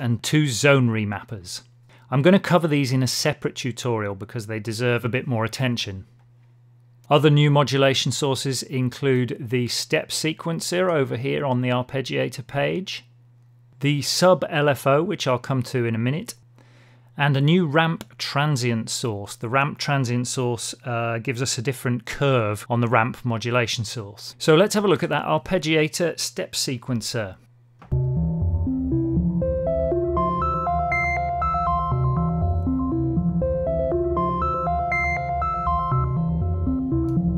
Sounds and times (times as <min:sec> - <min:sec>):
Speech: 0:00.0 - 0:06.1, 0:07.1 - 0:13.1, 0:13.8 - 0:16.4, 0:17.2 - 0:27.5
Synthesizer: 0:27.9 - 0:37.3.